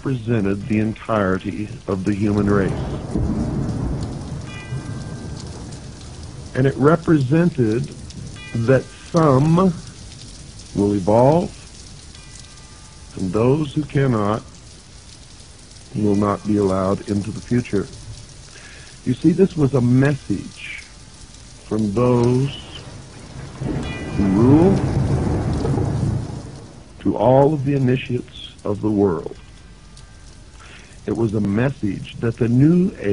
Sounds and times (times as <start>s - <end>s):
Rain on surface: 0.0s - 33.1s
Thunder: 2.4s - 7.1s, 22.6s - 26.9s.